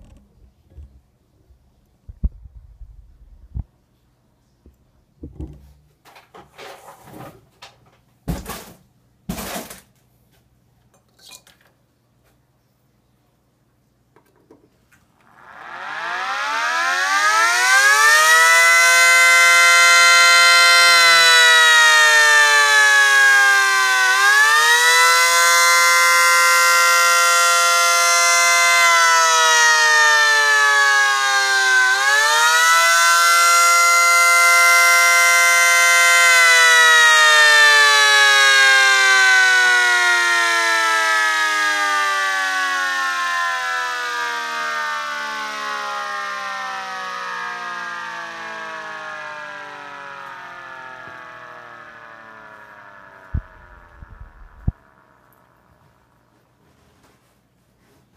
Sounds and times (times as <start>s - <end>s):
Siren: 15.2s - 57.2s.